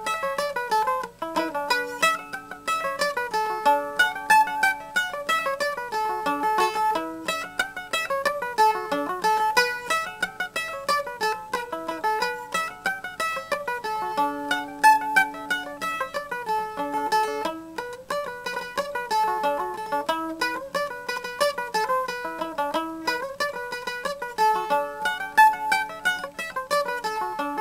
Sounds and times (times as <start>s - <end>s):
Mandolin: 0.0s - 27.6s.